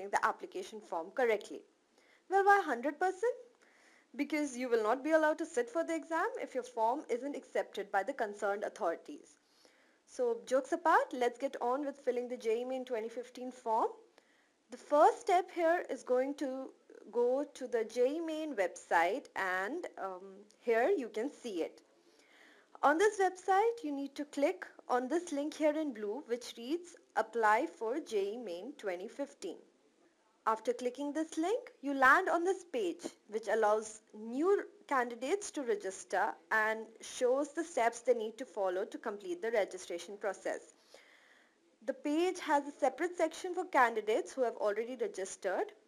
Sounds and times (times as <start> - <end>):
Speech: 0.0 - 1.7, 2.3 - 3.4, 4.2 - 9.4, 10.1 - 14.0, 14.7 - 21.8, 22.8 - 29.6, 30.4 - 40.7, 41.8 - 45.8.